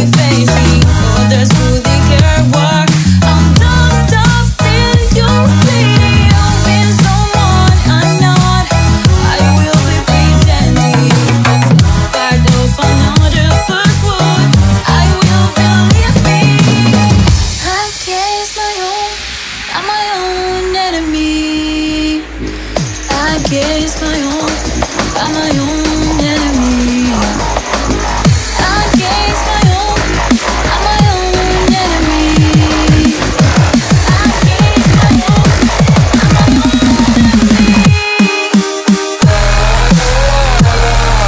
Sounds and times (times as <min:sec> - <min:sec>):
Music: 0:00.0 - 0:41.2.